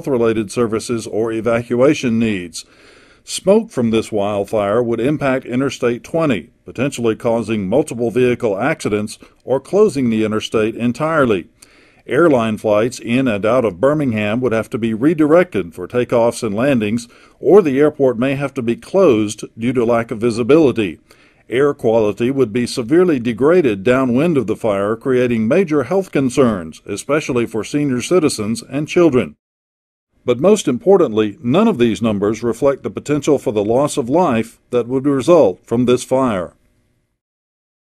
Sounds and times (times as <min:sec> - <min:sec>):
Speech: 0:00.0 - 0:02.7, 0:03.3 - 0:11.5, 0:12.1 - 0:29.4, 0:30.3 - 0:36.6.